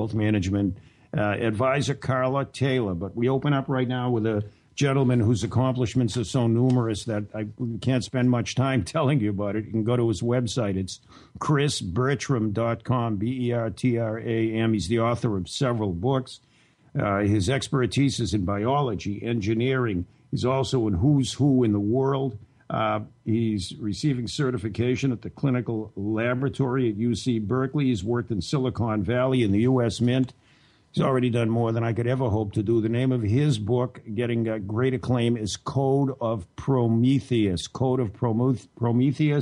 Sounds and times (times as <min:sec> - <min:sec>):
Speech: 0:00.0 - 0:39.4.